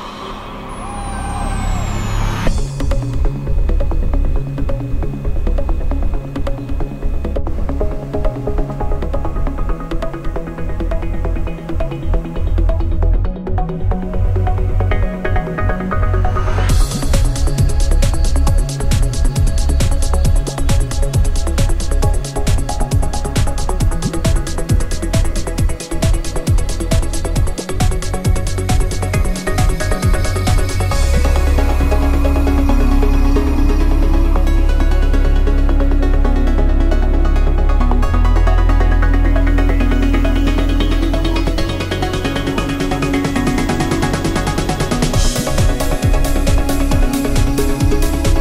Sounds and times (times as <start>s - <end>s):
Music: 0.0s - 48.4s.